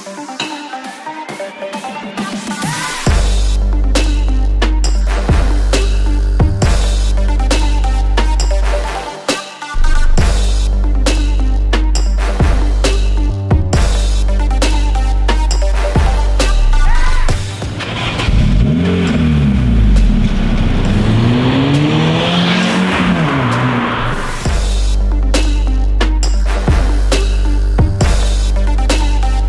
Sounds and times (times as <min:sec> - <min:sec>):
Music: 0:00.0 - 0:29.4
Car: 0:16.5 - 0:24.8.